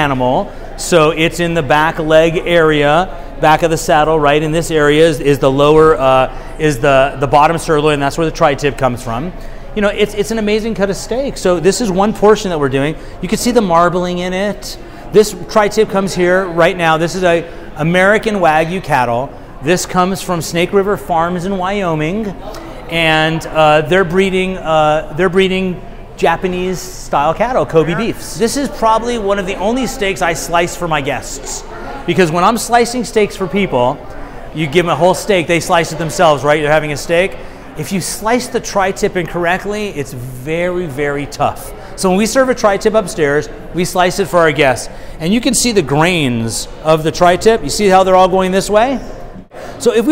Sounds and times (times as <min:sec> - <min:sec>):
Speech: 0:00.0 - 0:50.1.